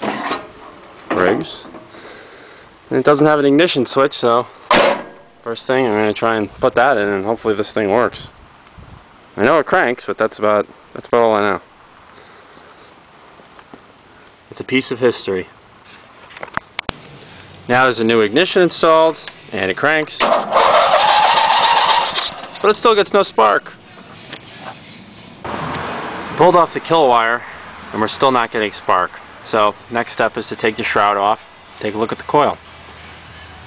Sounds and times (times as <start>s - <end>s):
Speech: 1.1s - 1.7s, 2.9s - 4.5s, 5.5s - 8.3s, 9.4s - 11.6s, 14.5s - 15.6s, 17.7s - 20.3s, 22.6s - 23.8s, 26.4s - 32.6s.